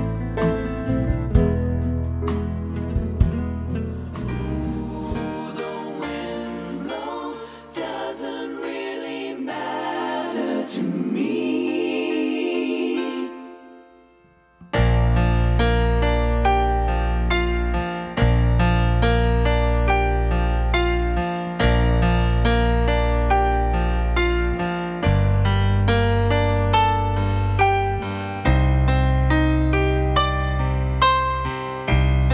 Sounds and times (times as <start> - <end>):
Music: 0.0 - 32.3.